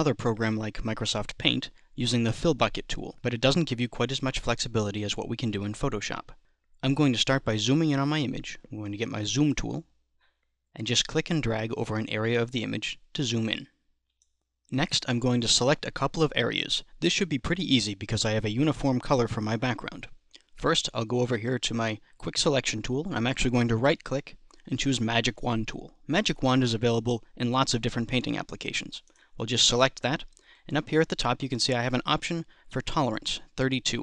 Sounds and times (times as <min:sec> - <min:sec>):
Speech: 0:00.0 - 0:09.9, 0:10.8 - 0:13.8, 0:14.7 - 0:34.0.